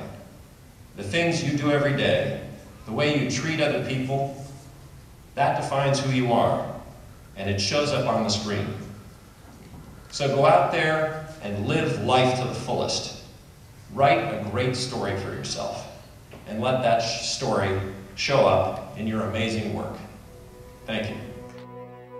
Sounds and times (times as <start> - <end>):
Narration, monologue: 0.0 - 21.7
Male speech, man speaking: 1.0 - 4.4, 5.4 - 6.8, 7.4 - 8.9, 10.1 - 13.3, 13.9 - 20.2, 20.9 - 21.4.